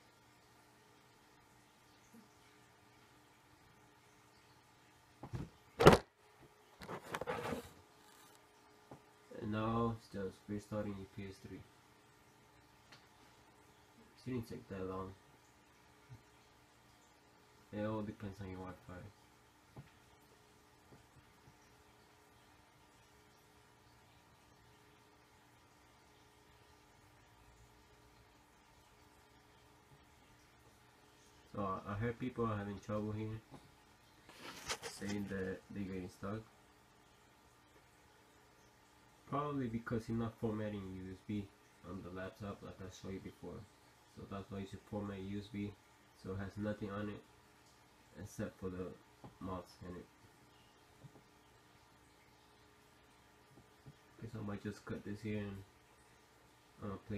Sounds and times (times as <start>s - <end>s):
Speech: 9.3s - 11.7s, 14.2s - 15.2s, 17.7s - 19.2s, 31.5s - 33.6s, 34.8s - 36.5s, 39.3s - 47.3s, 48.2s - 50.1s, 54.2s - 55.7s, 56.8s - 57.1s.